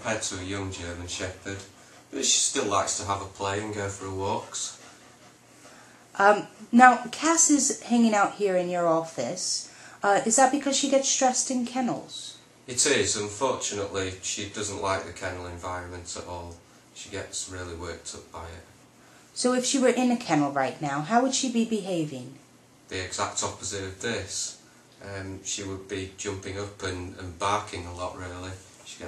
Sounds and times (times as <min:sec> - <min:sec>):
Speech: 0:00.0 - 0:04.8, 0:06.2 - 0:18.7, 0:19.4 - 0:29.0.